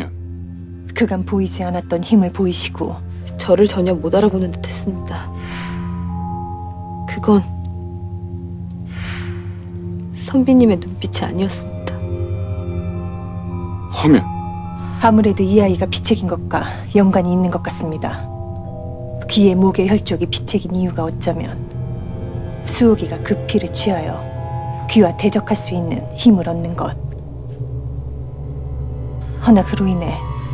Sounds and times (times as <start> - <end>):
Music: 0.0 - 30.5
Speech: 0.9 - 5.3, 10.2 - 12.0, 14.0 - 14.3, 24.9 - 27.0, 29.4 - 30.3.